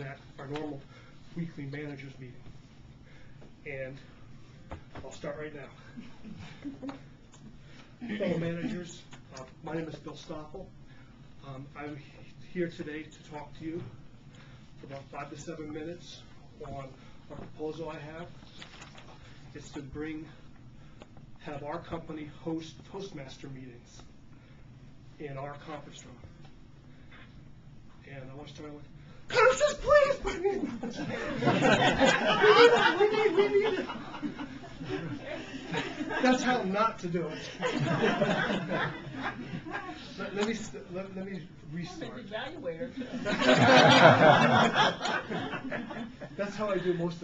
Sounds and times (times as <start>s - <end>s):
Male speech, man speaking: 0.0s - 0.8s, 1.4s - 2.4s, 3.6s - 4.1s, 5.0s - 5.8s, 8.1s - 10.7s, 11.4s - 13.9s, 14.8s - 18.4s, 19.6s - 20.4s, 21.4s - 24.1s, 25.2s - 26.3s, 28.0s - 30.6s, 36.2s - 37.7s, 40.2s - 43.0s, 46.4s - 47.2s
Narration, monologue: 0.0s - 47.2s.